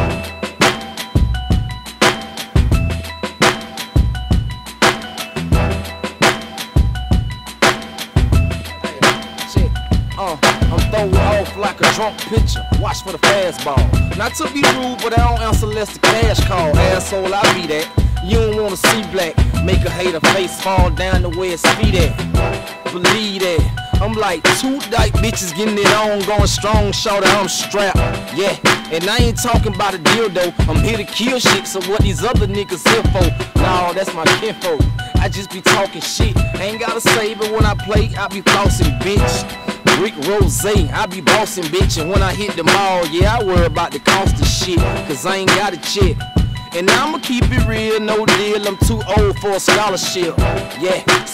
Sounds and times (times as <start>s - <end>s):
Music: 0.0s - 51.3s.